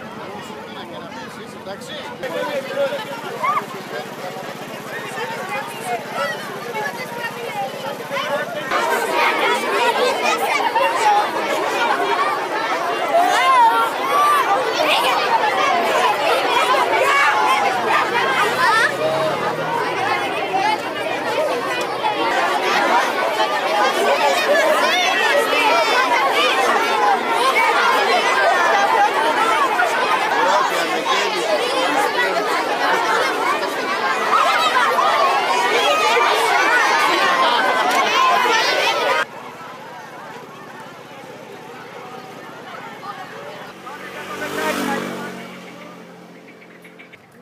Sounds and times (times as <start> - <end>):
Speech: 0.0 - 47.4.